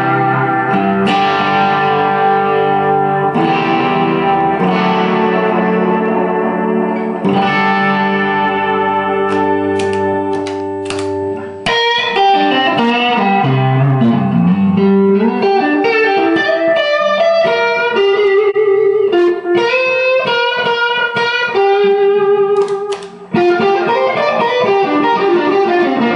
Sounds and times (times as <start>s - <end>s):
Music: 0.0s - 26.1s.